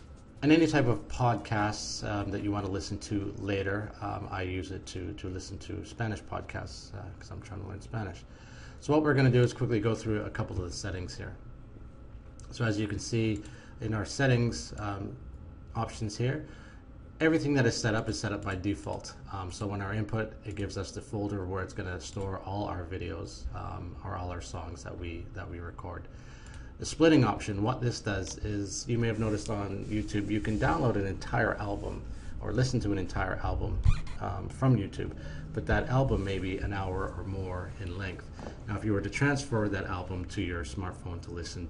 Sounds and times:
Speech: 0:00.4 - 0:11.4, 0:12.4 - 0:16.5, 0:17.2 - 0:26.1, 0:26.8 - 0:41.6.

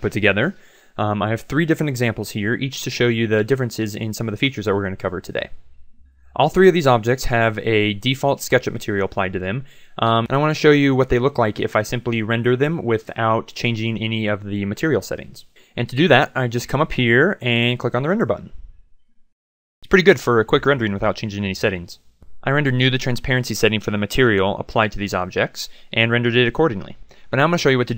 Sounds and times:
Speech: 0:00.0 - 0:05.6, 0:06.4 - 0:18.5, 0:19.8 - 0:27.9.

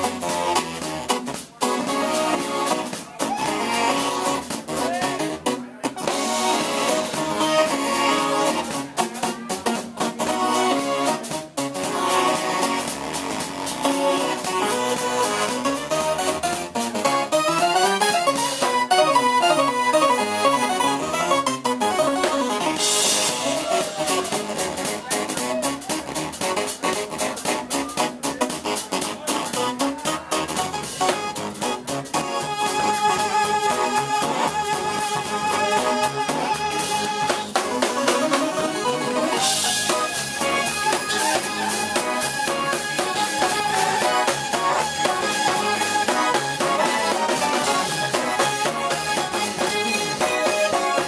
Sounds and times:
Music: 0:00.0 - 0:51.0.

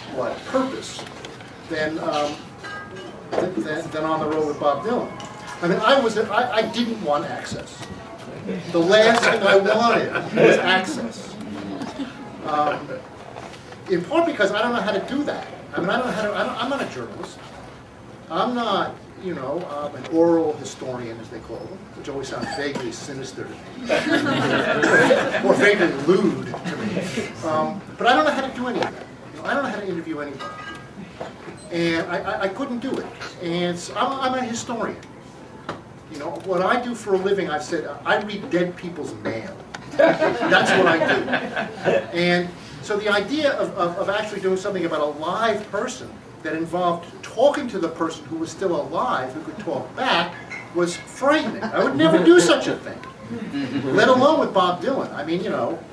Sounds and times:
Inside, large room or hall: 0:00.0 - 0:55.9.

